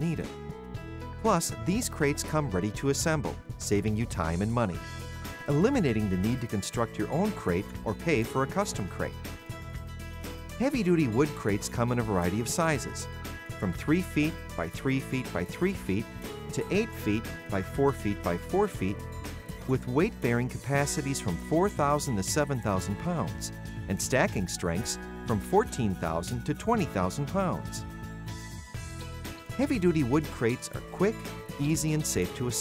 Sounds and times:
Speech: 0.0 - 0.3, 1.2 - 4.8, 5.5 - 9.2, 10.6 - 19.0, 19.6 - 27.8, 29.6 - 32.6
Music: 0.0 - 32.6.

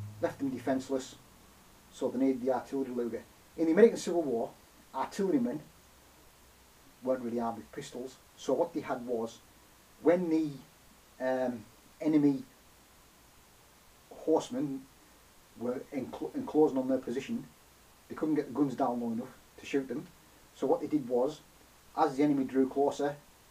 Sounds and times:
Inside, small room: 0.0 - 23.5
Speech: 0.2 - 1.2, 1.9 - 5.7, 7.0 - 9.4, 10.0 - 12.6, 14.1 - 14.9, 15.6 - 17.5, 18.1 - 23.2.

